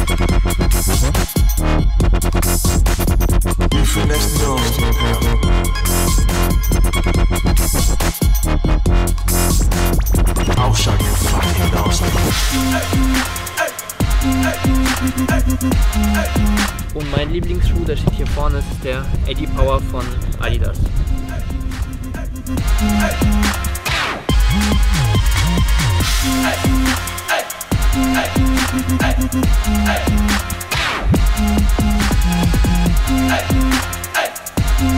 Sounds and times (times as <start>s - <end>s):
Electronic music: 0.0s - 34.9s.